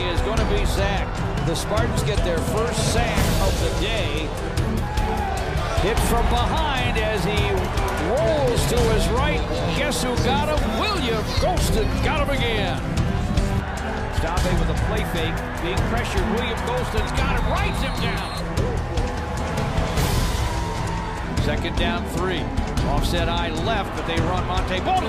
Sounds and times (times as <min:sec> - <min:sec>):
Speech: 0:00.0 - 0:04.3, 0:05.8 - 0:12.8, 0:14.2 - 0:18.4, 0:21.4 - 0:25.0
Music: 0:00.0 - 0:25.0.